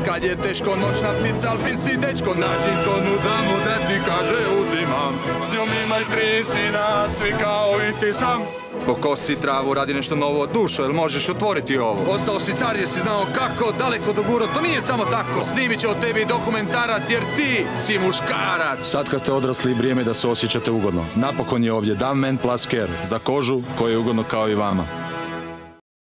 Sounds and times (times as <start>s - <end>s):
Music: 0.0s - 25.8s
Speech: 8.9s - 24.9s.